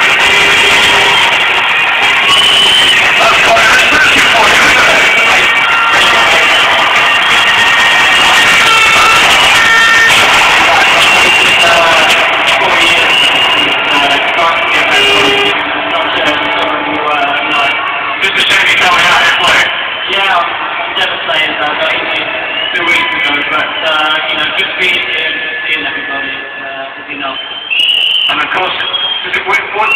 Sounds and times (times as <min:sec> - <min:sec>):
Male speech, man speaking: 0:03.2 - 0:05.3, 0:10.6 - 0:27.4, 0:28.3 - 0:29.9.